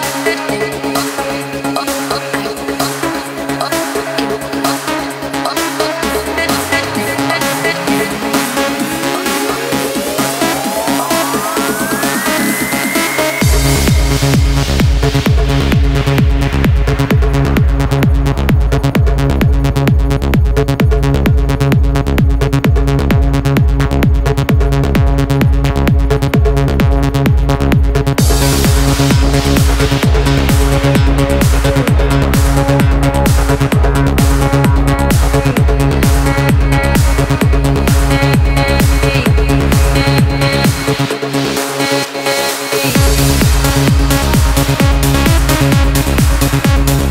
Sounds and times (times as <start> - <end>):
Music: 0.0 - 47.1.